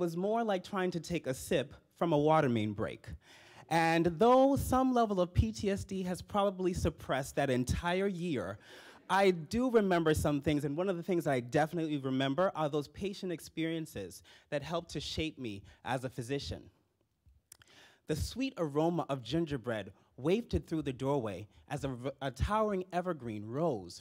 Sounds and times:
Speech: 0.0 - 16.8, 18.1 - 24.0.

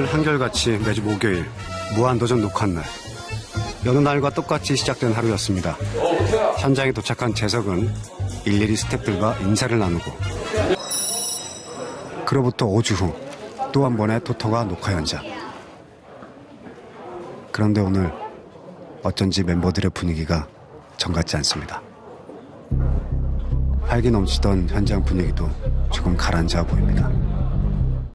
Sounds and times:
Speech: 0.0 - 2.9, 3.8 - 22.1, 23.8 - 27.7
Music: 0.0 - 11.1, 22.7 - 28.1.

